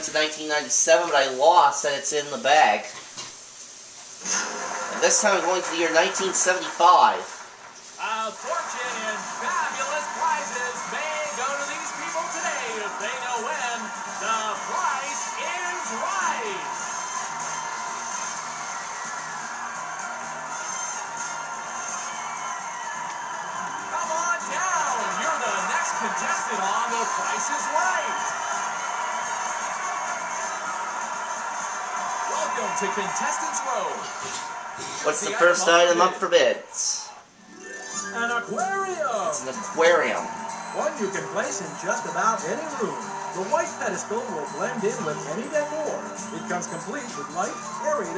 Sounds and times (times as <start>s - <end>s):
Music: 0.0s - 1.1s, 4.2s - 36.2s, 37.3s - 48.1s
Speech: 0.0s - 3.0s, 5.0s - 7.3s, 8.0s - 16.6s, 38.2s - 48.1s.